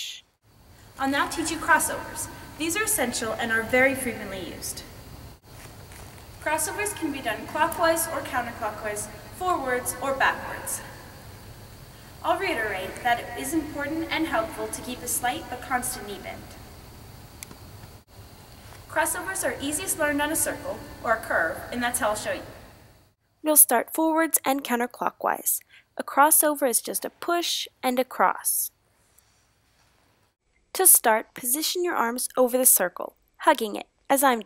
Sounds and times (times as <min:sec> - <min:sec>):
Speech: 0:00.0 - 0:00.2, 0:01.0 - 0:04.9, 0:06.4 - 0:10.9, 0:12.2 - 0:16.5, 0:18.9 - 0:22.5, 0:23.4 - 0:28.7, 0:30.8 - 0:34.4.